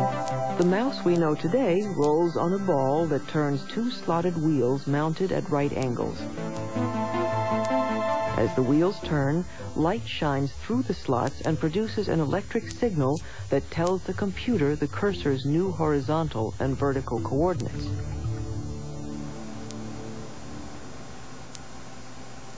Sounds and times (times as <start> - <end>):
Music: 0.0 - 21.2
Speech: 0.6 - 6.2, 8.4 - 17.9.